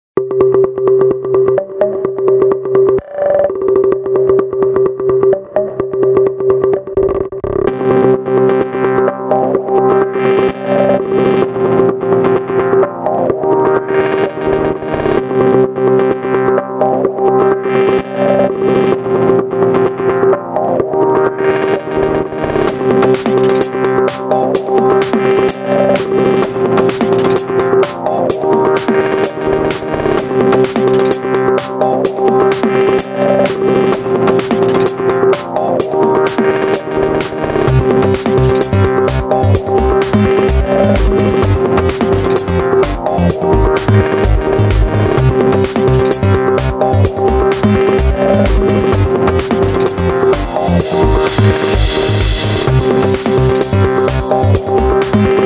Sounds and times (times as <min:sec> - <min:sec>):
Drum machine: 0:00.2 - 0:15.5, 0:20.0 - 0:55.4.